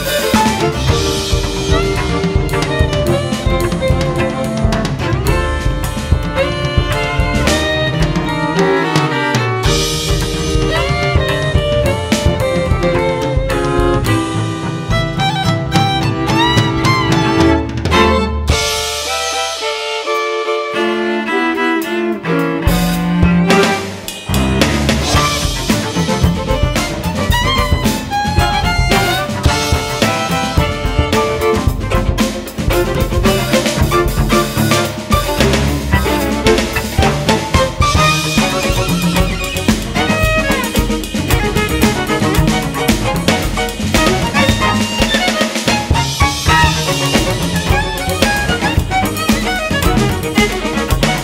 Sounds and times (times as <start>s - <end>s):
Drum: 0.0s - 51.2s
Drum kit: 0.0s - 51.2s
Violin, fiddle: 0.0s - 51.2s.